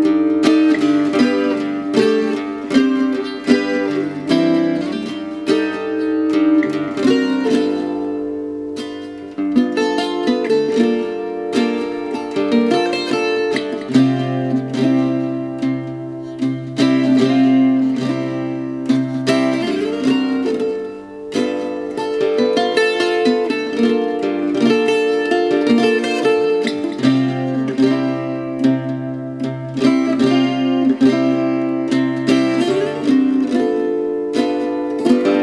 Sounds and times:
Music: 0.0 - 35.4.

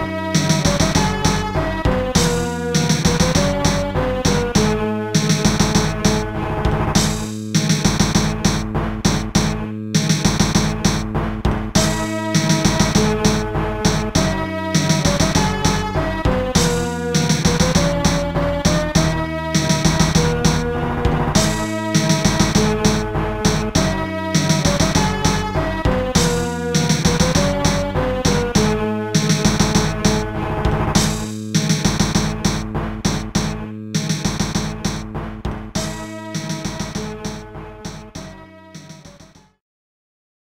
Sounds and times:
Video game music: 0.0 - 39.6.

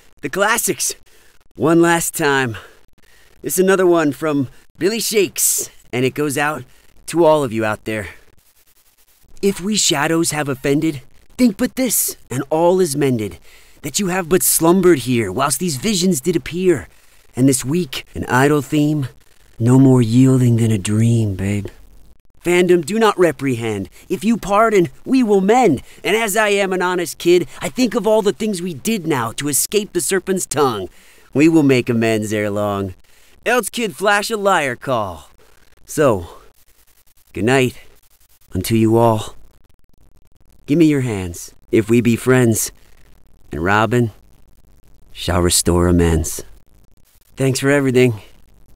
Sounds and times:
Speech: 0.2 - 1.0, 1.6 - 2.7, 3.4 - 8.2, 9.4 - 21.8, 22.4 - 35.3, 35.9 - 36.4, 37.4 - 37.8, 38.5 - 39.4, 40.7 - 42.7, 43.5 - 44.2, 45.2 - 46.5, 47.4 - 48.3.

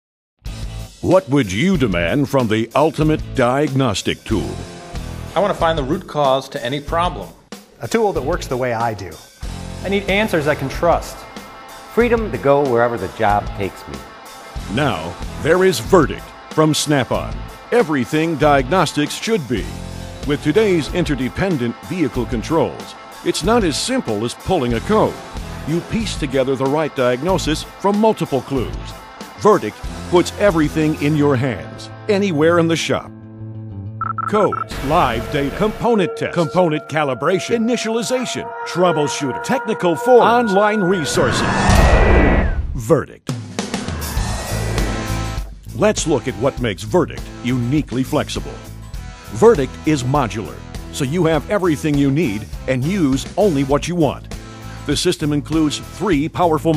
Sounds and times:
Music: 0.4 - 42.4, 43.3 - 56.7
Speech: 1.0 - 4.6, 5.3 - 9.2, 9.8 - 11.2, 12.0 - 14.0, 14.7 - 33.1, 34.3 - 41.4, 42.8 - 43.3, 45.7 - 48.6, 49.3 - 54.3, 54.9 - 56.7.

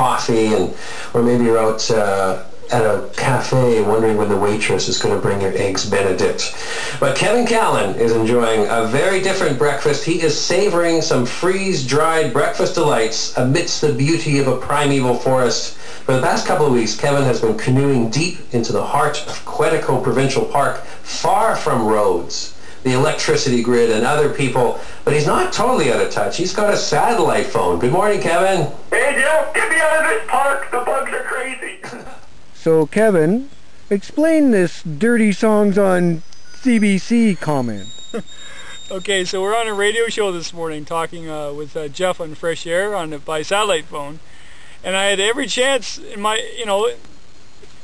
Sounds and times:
Speech: 0.0 - 37.9, 38.9 - 44.2, 44.8 - 47.0.

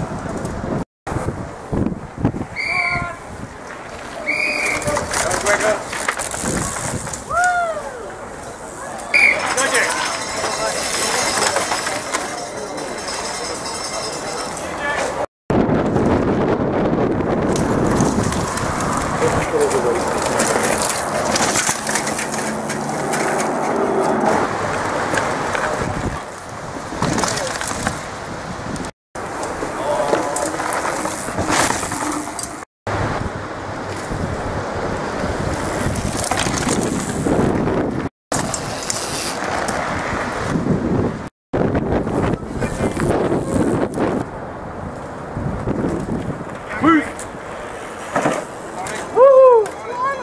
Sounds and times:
Bicycle: 0.0 - 50.2
Outside, rural or natural: 0.0 - 50.2.

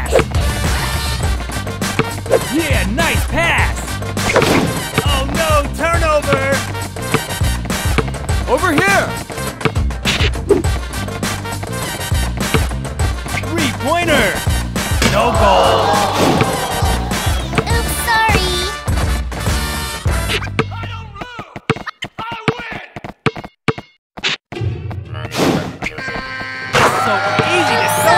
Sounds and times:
Music: 0.0 - 23.0, 24.5 - 28.1
Speech: 5.0 - 6.6, 13.5 - 14.4, 15.0 - 16.5, 20.7 - 21.6, 22.2 - 23.0.

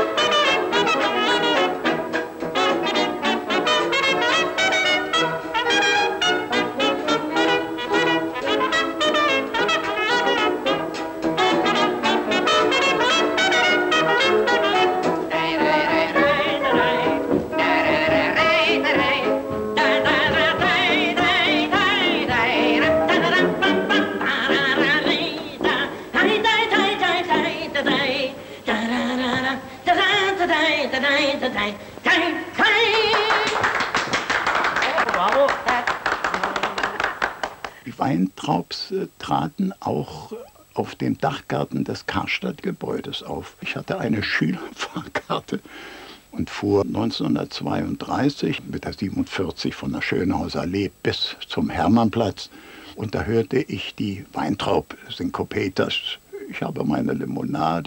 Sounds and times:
Music: 0.0 - 34.6
Yodeling: 11.4 - 33.6.

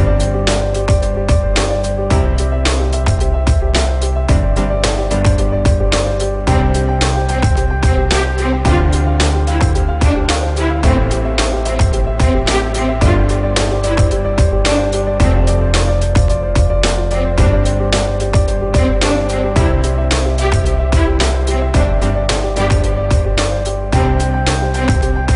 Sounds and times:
Music: 0.0 - 25.3.

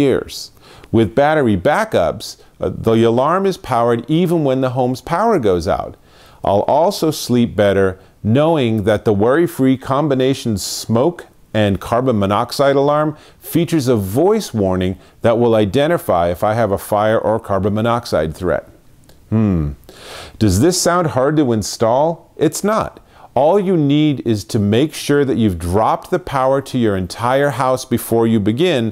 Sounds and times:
Speech: 0.0 - 19.8, 20.4 - 28.9.

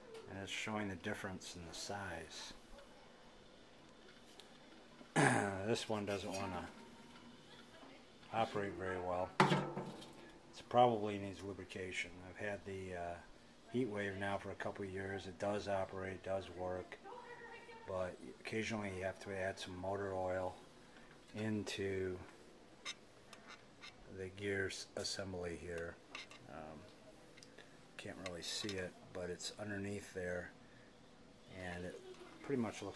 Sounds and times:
Speech: 0.0 - 3.3, 5.2 - 6.8, 7.5 - 9.4, 10.6 - 20.6, 21.3 - 22.4, 24.1 - 27.0, 28.0 - 30.5, 31.5 - 32.9.

